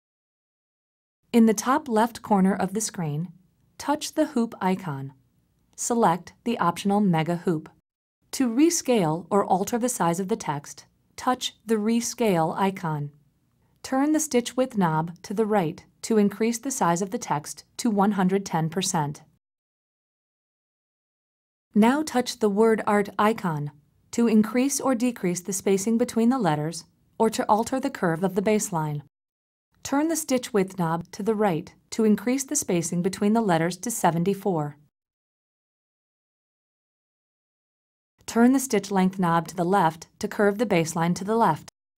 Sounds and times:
Speech: 1.4s - 5.2s, 5.8s - 13.2s, 13.8s - 19.4s, 21.8s - 29.1s, 29.8s - 34.9s, 38.3s - 41.8s.

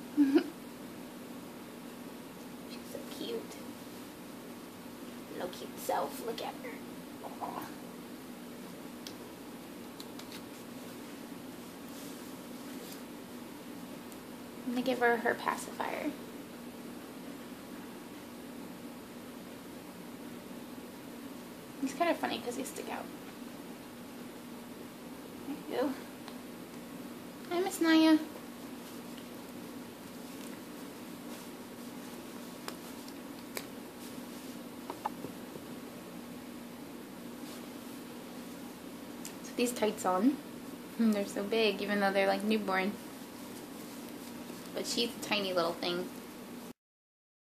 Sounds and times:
Speech: 2.7s - 3.7s, 5.3s - 7.8s, 14.7s - 16.2s, 21.8s - 23.1s, 25.5s - 26.1s, 27.5s - 28.3s, 39.4s - 40.4s, 41.0s - 43.0s, 44.8s - 46.1s.

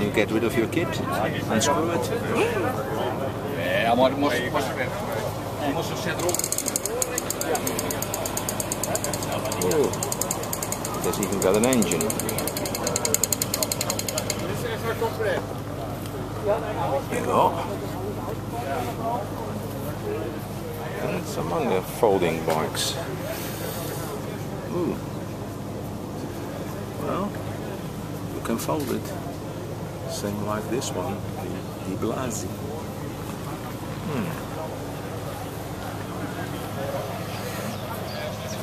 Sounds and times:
Speech: 0.0s - 10.2s, 10.9s - 25.3s, 26.4s - 38.6s
Bicycle: 6.2s - 14.5s.

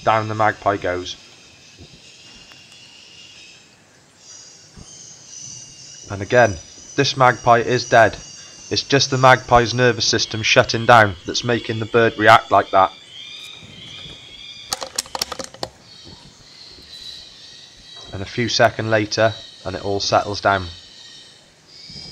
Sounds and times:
Speech: 0.0s - 1.2s, 6.1s - 13.0s, 18.1s - 20.8s.

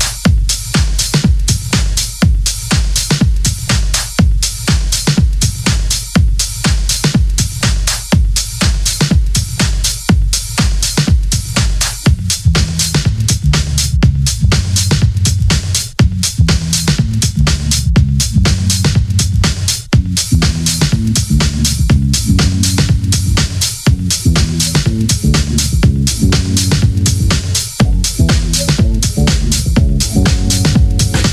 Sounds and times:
Music: 0.0s - 31.3s.

